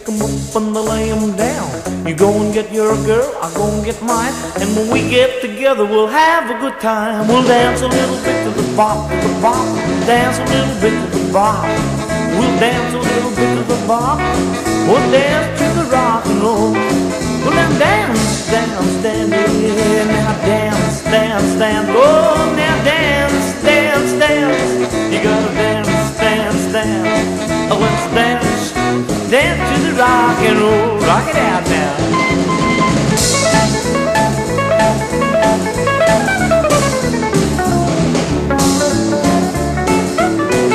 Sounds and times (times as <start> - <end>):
Swing music: 0.0 - 40.7.